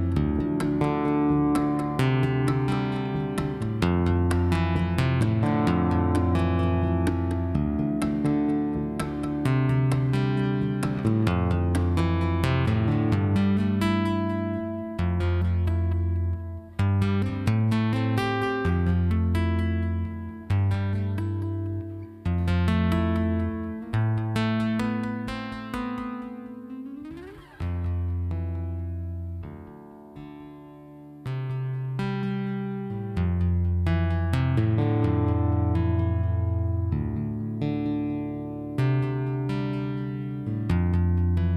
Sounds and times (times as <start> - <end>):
Music: 0.0 - 41.5.